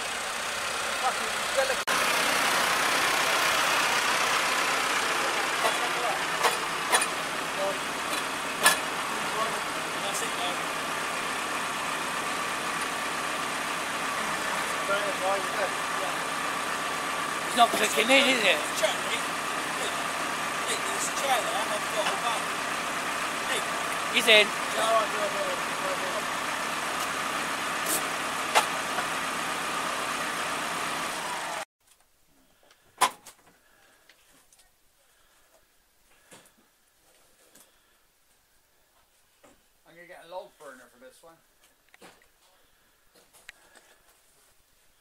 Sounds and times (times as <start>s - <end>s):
Speech: 9.2s - 10.6s, 14.8s - 16.2s, 17.5s - 19.2s, 20.7s - 22.5s, 23.5s - 26.2s, 39.8s - 41.4s.